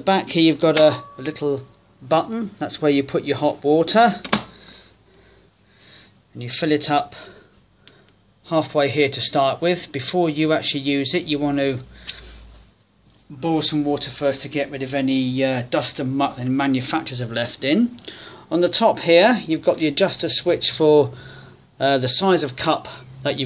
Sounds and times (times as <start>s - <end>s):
Speech: 0.0s - 4.3s, 6.4s - 7.3s, 8.4s - 11.9s, 13.3s - 21.2s, 21.8s - 23.4s.